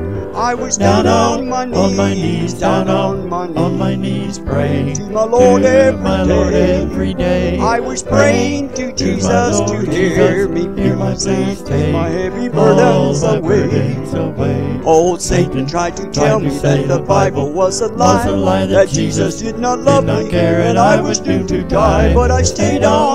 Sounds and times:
Choir: 0.0 - 23.1
Male singing: 0.3 - 23.1.

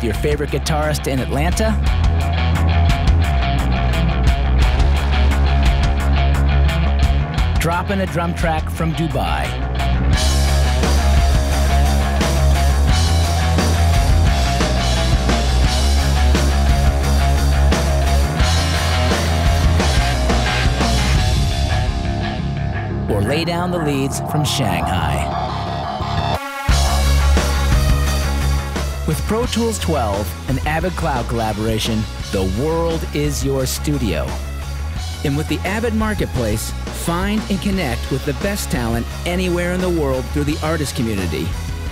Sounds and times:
Speech: 0.0 - 1.8, 7.6 - 9.6, 23.1 - 25.4, 29.1 - 34.4, 35.2 - 41.6
Music: 0.0 - 41.9.

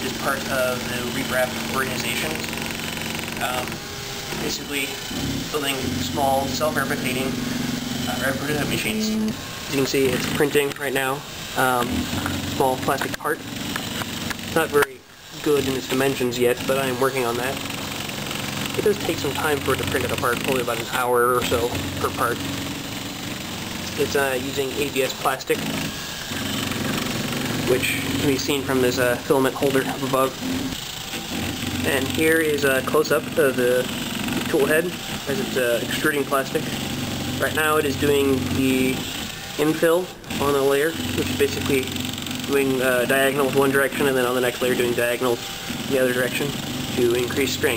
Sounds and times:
Speech: 0.0 - 2.5, 3.4 - 3.8, 4.4 - 7.4, 8.1 - 11.9, 12.6 - 13.4, 14.5 - 17.6, 18.8 - 22.4, 23.9 - 25.7, 27.7 - 30.4, 31.8 - 36.7, 37.4 - 47.7.

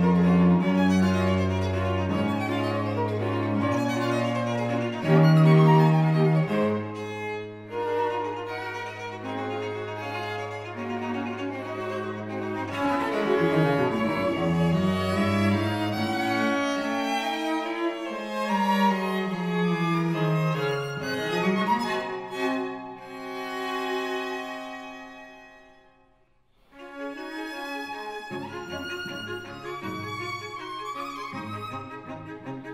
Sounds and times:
Piano: 0.0 - 25.8.

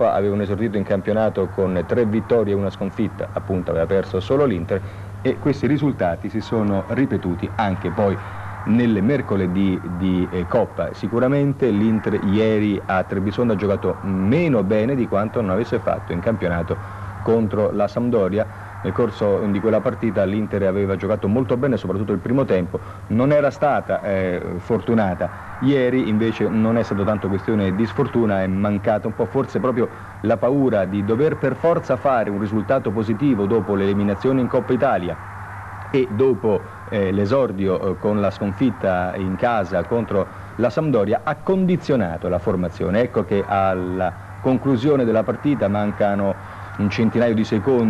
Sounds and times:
Speech: 0.0 - 35.2, 36.0 - 47.9.

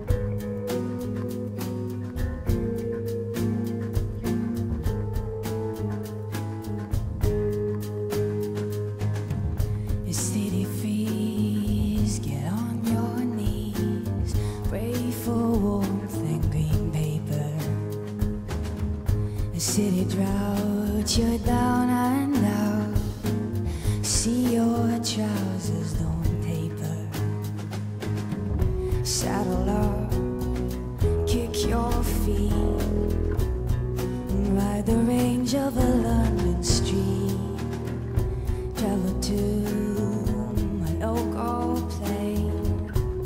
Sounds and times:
Music: 0.0 - 43.2.

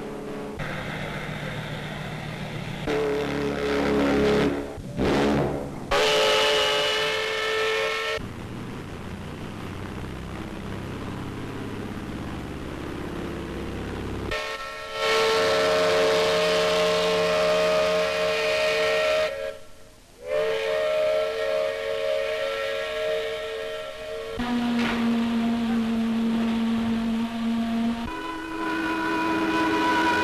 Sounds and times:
Ship: 0.0 - 30.2
Wind: 0.0 - 30.2
Steam whistle: 2.8 - 8.2, 14.3 - 30.2.

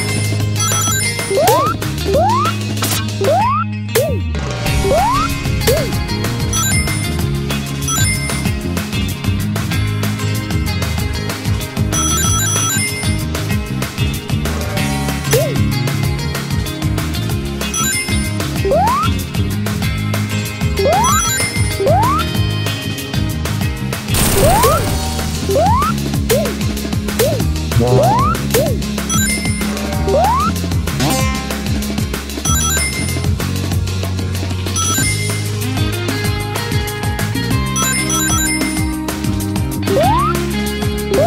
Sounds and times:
Music: 0.0 - 41.2.

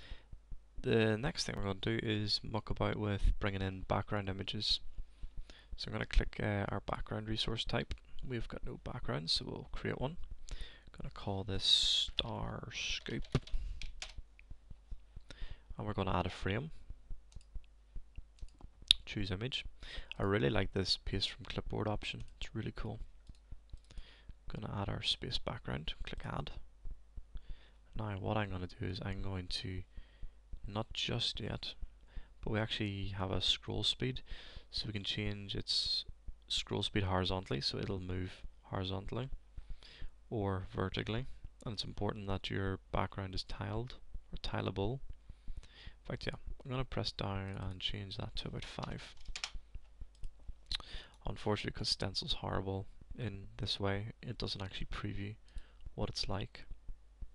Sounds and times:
Speech: 0.8 - 4.9, 5.8 - 10.2, 10.9 - 13.4, 15.8 - 16.8, 18.9 - 23.1, 24.5 - 26.6, 28.0 - 29.9, 30.6 - 31.8, 32.4 - 39.4, 40.3 - 45.0, 46.1 - 49.2, 50.7 - 55.4, 56.0 - 56.7.

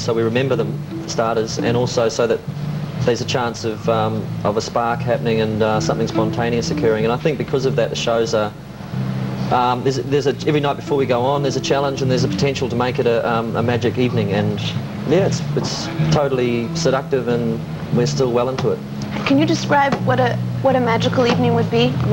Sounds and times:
Speech: 0.0 - 2.4, 3.0 - 8.5, 9.5 - 22.1.

